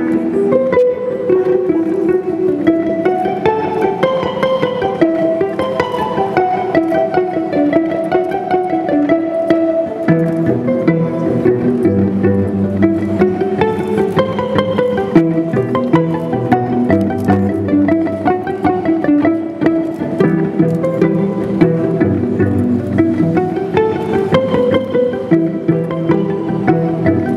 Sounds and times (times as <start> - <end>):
Music: 0.0 - 27.3.